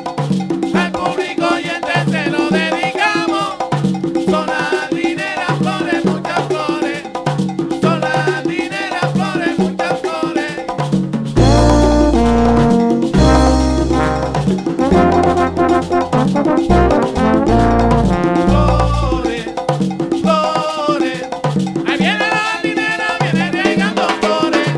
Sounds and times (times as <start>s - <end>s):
Singing: 0.8s - 3.7s, 4.3s - 7.2s, 7.8s - 10.7s, 18.6s - 19.6s, 20.3s - 24.7s
Drum kit: 11.0s - 19.9s
Drum: 11.3s - 20.4s.